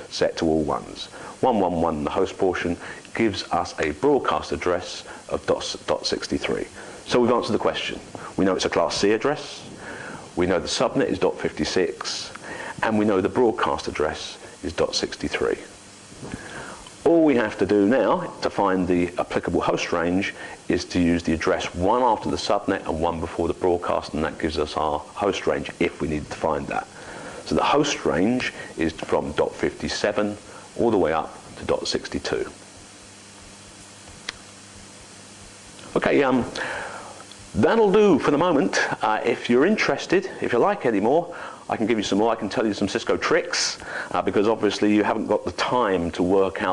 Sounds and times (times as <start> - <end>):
Speech: 0.1 - 9.7, 10.4 - 15.7, 17.0 - 26.9, 27.5 - 32.6, 35.8 - 36.6, 37.6 - 46.7.